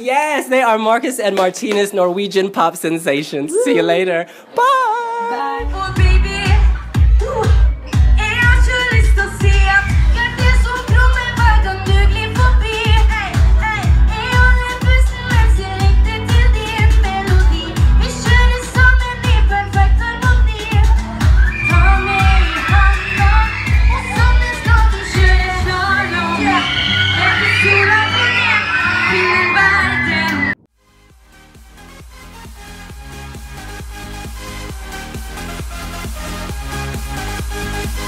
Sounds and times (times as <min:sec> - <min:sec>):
Inside, large room or hall: 0:00.0 - 0:38.0
Music: 0:05.6 - 0:38.0.